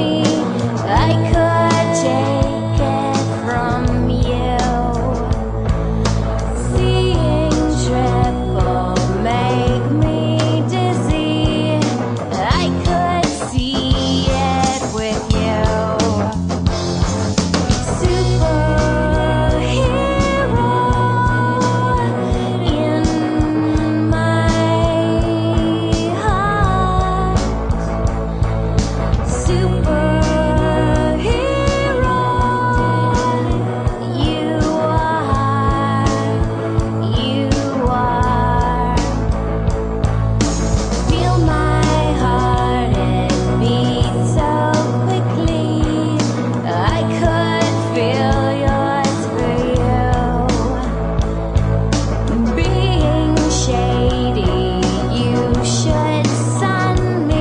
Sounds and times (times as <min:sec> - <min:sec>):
Jazz: 0:00.0 - 0:57.4.